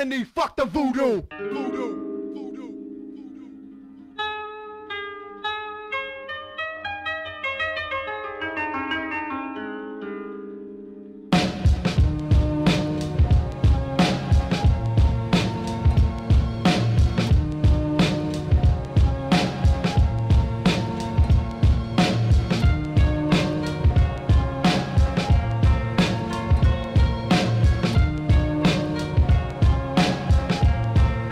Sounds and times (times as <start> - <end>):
Zither: 1.3 - 11.3.